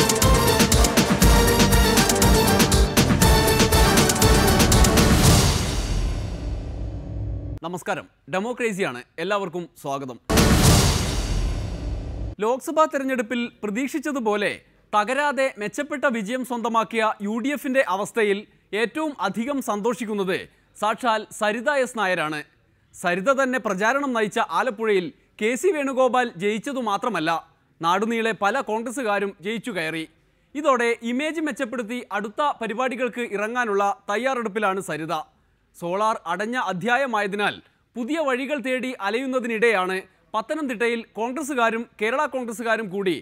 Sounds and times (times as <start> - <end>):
Male speech, man speaking: 7.6 - 10.3, 12.4 - 43.2.